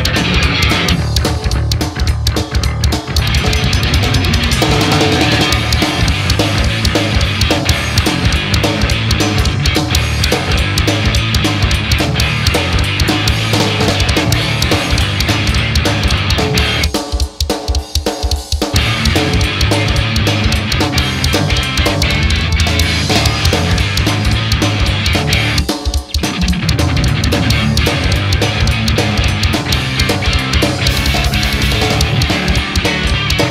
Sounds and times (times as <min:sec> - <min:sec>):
Music: 0:00.0 - 0:33.5.